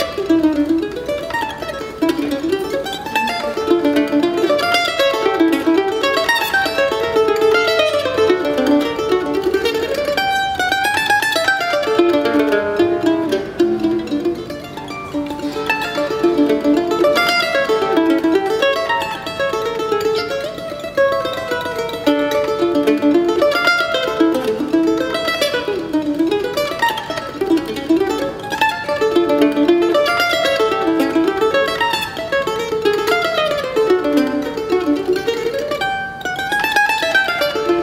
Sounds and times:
Guitar: 0.0s - 37.8s
Mandolin: 0.0s - 37.8s.

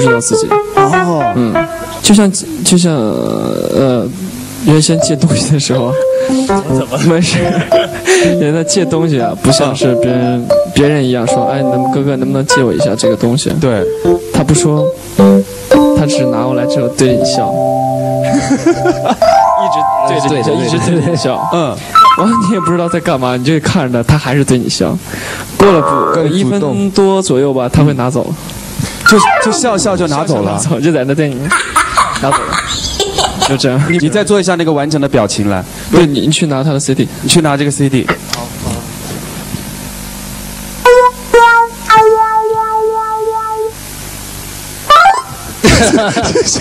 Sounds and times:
Music: 0.0s - 2.6s, 4.6s - 23.6s, 29.0s - 29.9s, 40.8s - 44.0s
Speech: 0.0s - 7.6s, 8.4s - 14.9s, 19.6s - 25.0s, 25.6s - 28.4s, 29.1s - 31.5s, 33.5s - 38.9s.

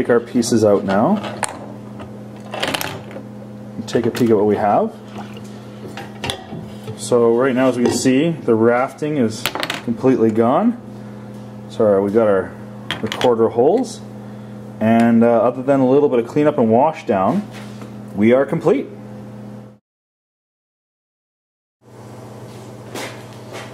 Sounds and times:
Speech: 0.0s - 1.2s, 3.8s - 5.0s, 7.0s - 10.8s, 11.7s - 14.1s, 14.8s - 17.5s, 18.2s - 19.0s.

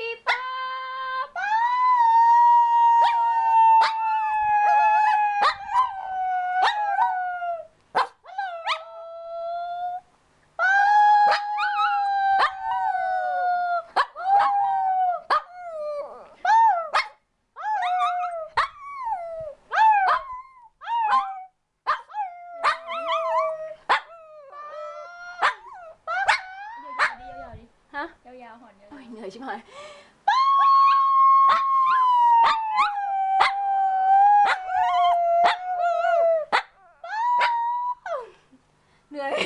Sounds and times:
Howl: 1.4s - 7.7s, 10.6s - 17.0s, 17.6s - 21.5s, 22.1s - 27.5s, 30.3s - 38.3s.

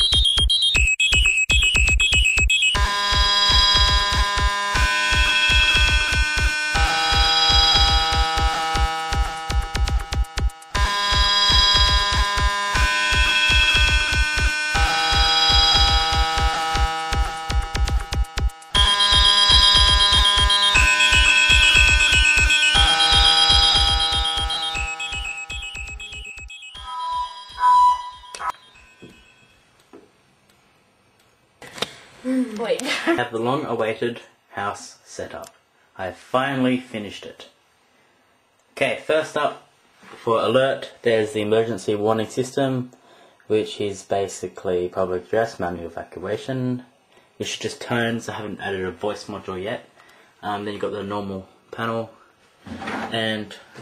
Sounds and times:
Buzzer: 0.0s - 29.2s
Music: 0.0s - 29.3s.

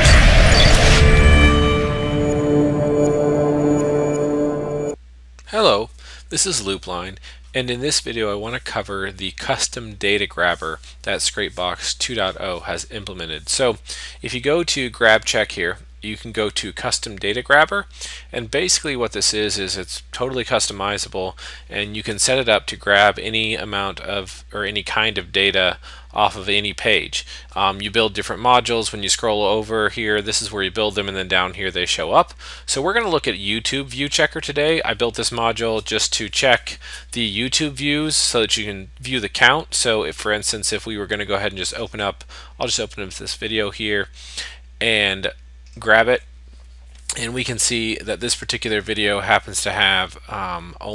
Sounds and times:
Speech: 5.4s - 44.2s, 44.8s - 46.3s, 47.0s - 50.9s.

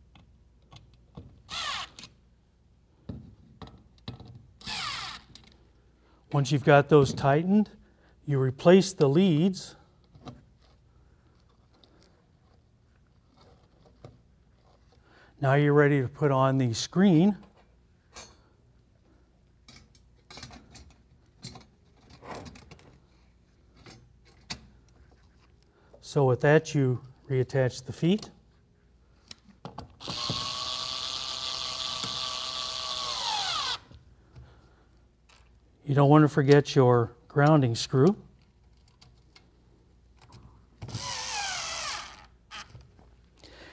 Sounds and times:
Speech: 6.4s - 9.8s, 15.4s - 17.4s, 26.0s - 28.4s, 35.8s - 38.3s.

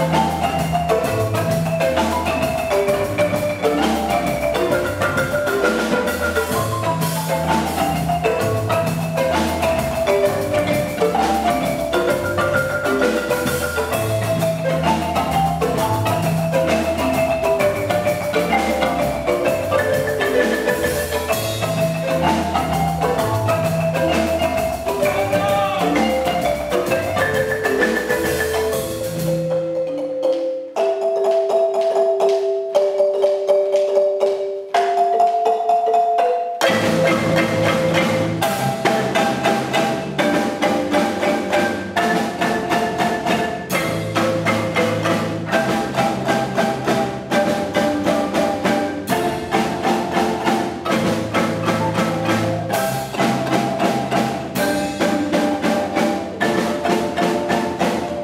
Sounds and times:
Glockenspiel: 0.0s - 58.2s
Marimba, xylophone: 0.0s - 58.2s.

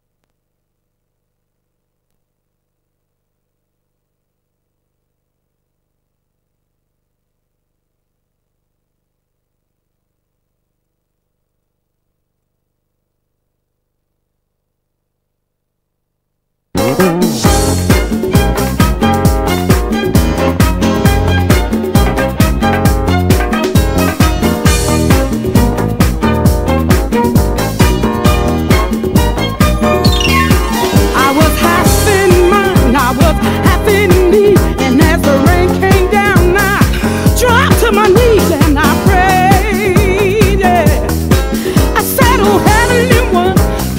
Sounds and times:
Music: 16.8s - 43.9s.

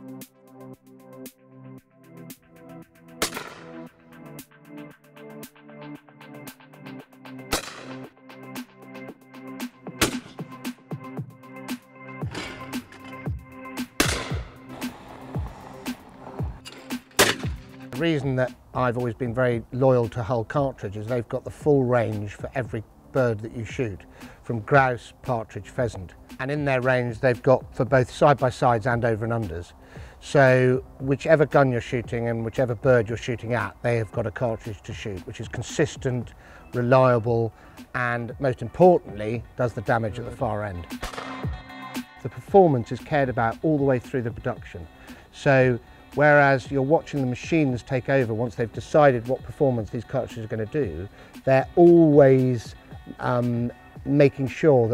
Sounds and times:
Speech: 18.0s - 40.9s, 42.2s - 54.9s.

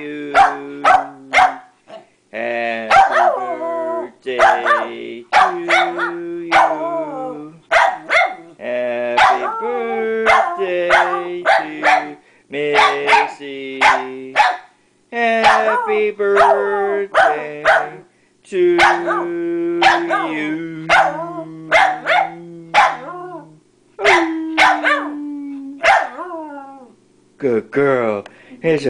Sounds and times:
Speech: 15.1s - 17.0s, 24.0s - 25.8s, 27.4s - 28.9s.

